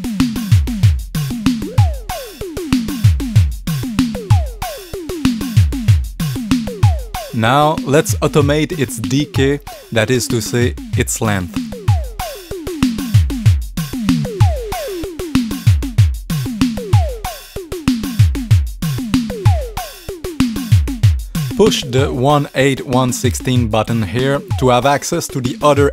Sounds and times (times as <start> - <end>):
Drum machine: 0.0 - 25.9
Speech: 7.4 - 11.6, 21.6 - 25.9.